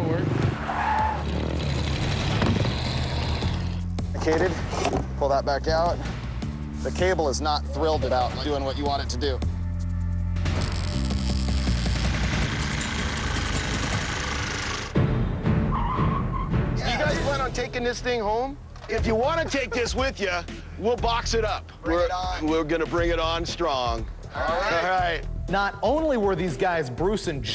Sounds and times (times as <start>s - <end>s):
Vehicle: 0.0s - 6.3s, 10.4s - 15.3s
Music: 3.2s - 13.9s, 15.0s - 27.5s.